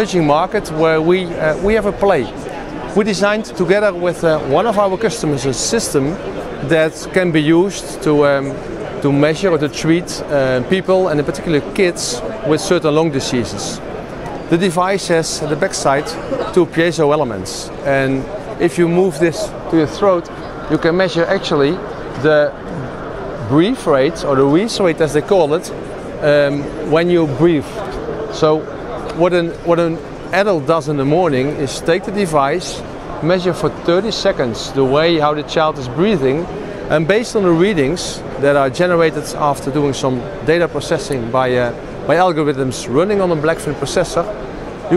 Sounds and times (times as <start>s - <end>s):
Speech: 0.0s - 13.8s, 14.5s - 44.9s.